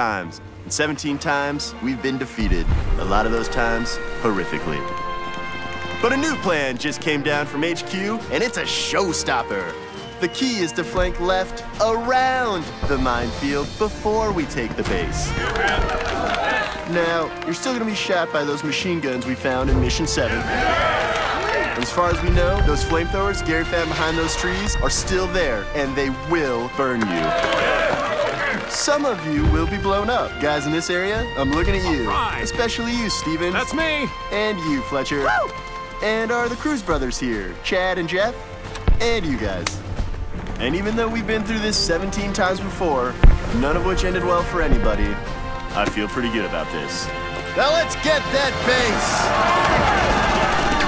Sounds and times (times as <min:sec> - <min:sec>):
Male speech, man speaking: 0:00.0 - 0:04.9, 0:06.0 - 0:20.5, 0:21.5 - 0:27.5, 0:28.4 - 0:35.4, 0:36.0 - 0:39.8, 0:40.6 - 0:49.3
Narration, monologue: 0:00.0 - 0:15.9, 0:16.8 - 0:20.5, 0:21.8 - 0:27.2, 0:28.6 - 0:49.0
Music: 0:00.0 - 0:50.8.